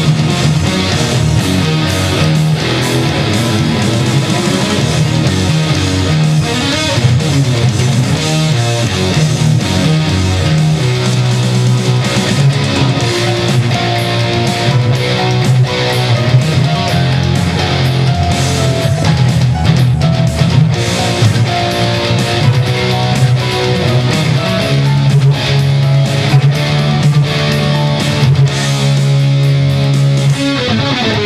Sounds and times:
Electric guitar: 0.0s - 31.2s.

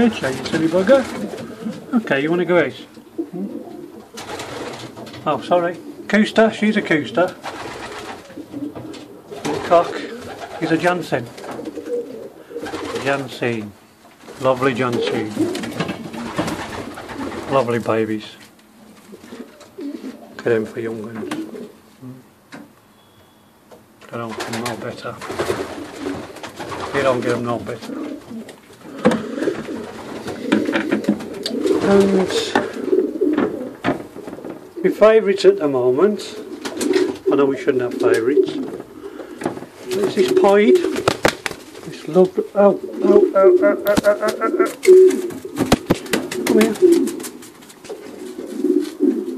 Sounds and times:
Coo: 3.2s - 4.1s, 9.8s - 10.5s, 11.6s - 13.0s, 19.1s - 20.4s, 21.2s - 22.2s, 27.8s - 33.8s, 36.3s - 37.3s, 42.8s - 45.7s, 46.3s - 49.3s.

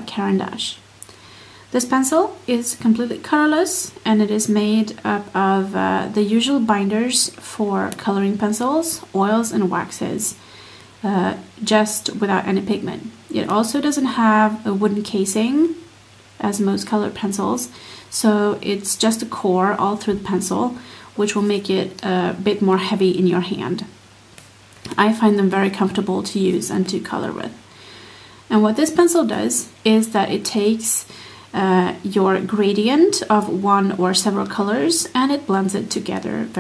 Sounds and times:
Speech: 0.0s - 0.9s, 1.7s - 10.4s, 11.0s - 24.0s, 24.9s - 27.6s, 28.5s - 36.6s.

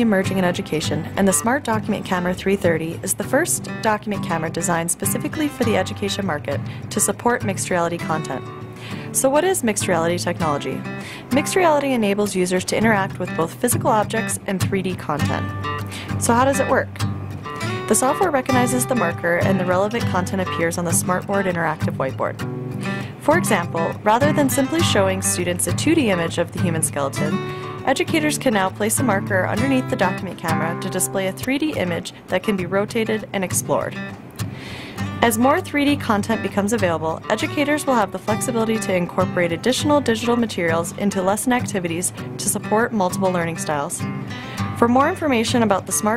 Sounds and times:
Speech: 0.0s - 8.4s, 9.1s - 17.0s, 17.9s - 22.4s, 23.2s - 34.0s, 35.2s - 44.0s, 44.8s - 46.1s
Music: 0.0s - 46.1s.

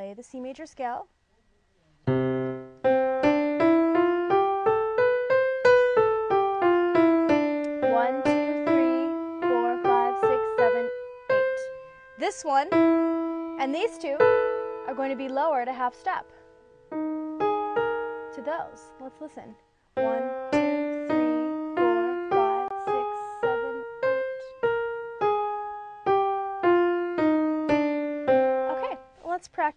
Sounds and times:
Speech: 0.0s - 2.0s, 7.9s - 10.9s, 12.2s - 12.7s, 13.6s - 14.2s, 18.4s - 20.3s, 28.7s - 29.7s
Electric piano: 2.1s - 29.2s.

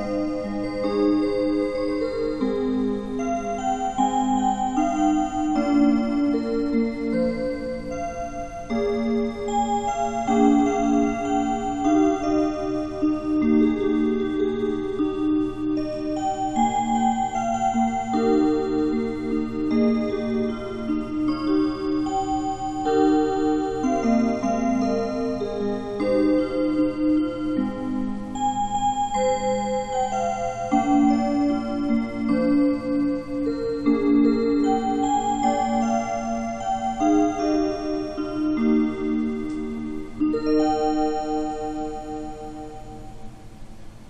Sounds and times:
Music: 0.0s - 44.1s.

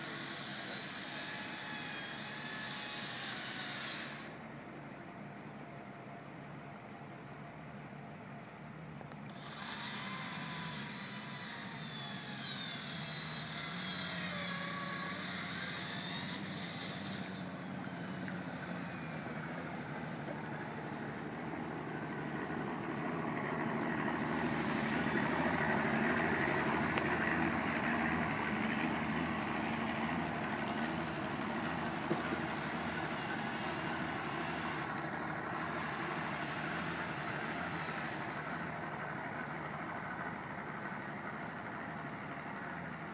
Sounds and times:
Motorboat, speedboat: 0.0s - 43.1s.

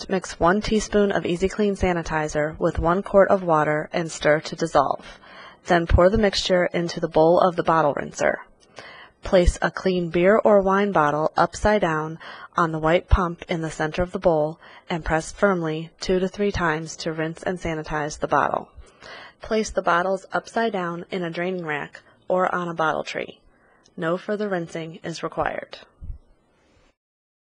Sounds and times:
Speech: 0.0s - 8.4s, 9.2s - 18.7s, 19.4s - 23.4s, 24.0s - 25.9s.

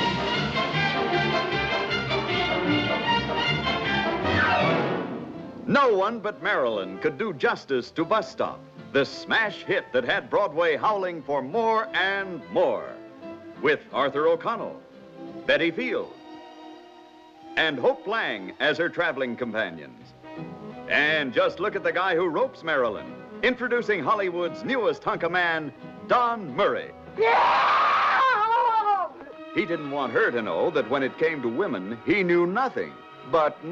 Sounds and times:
Music: 0.0s - 33.7s
Speech: 5.7s - 13.0s, 13.6s - 14.8s, 15.5s - 16.1s, 17.6s - 20.0s, 20.9s - 26.9s, 29.6s - 33.7s.

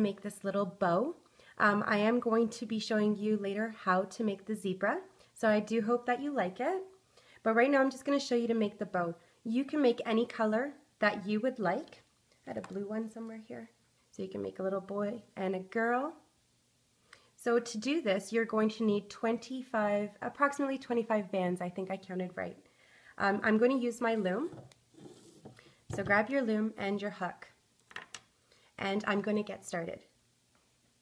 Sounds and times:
Speech: 0.0s - 16.3s, 17.4s - 22.6s, 23.2s - 24.6s, 25.9s - 27.6s, 28.8s - 30.2s.

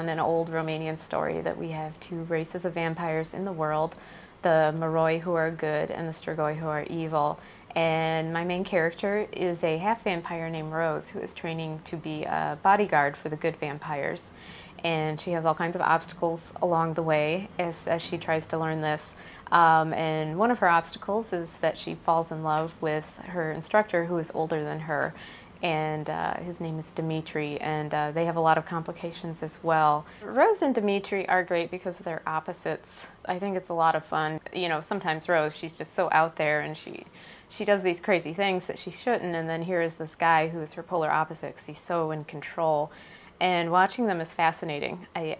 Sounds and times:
Speech: 0.0s - 45.3s.

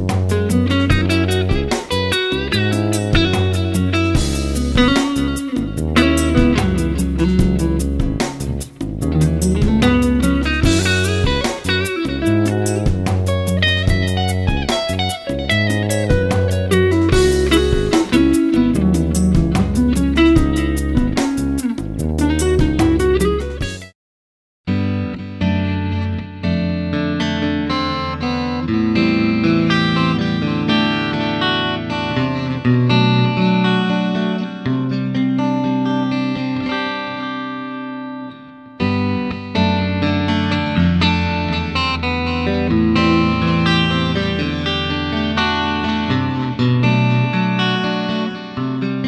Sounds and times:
Music: 0.0s - 24.0s, 24.7s - 49.0s.

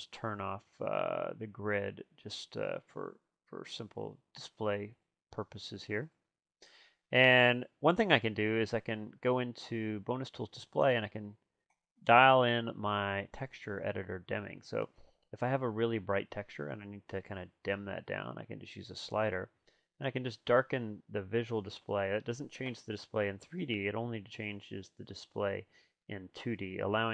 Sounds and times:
Speech: 0.0s - 6.2s, 7.2s - 11.4s, 12.1s - 27.1s.

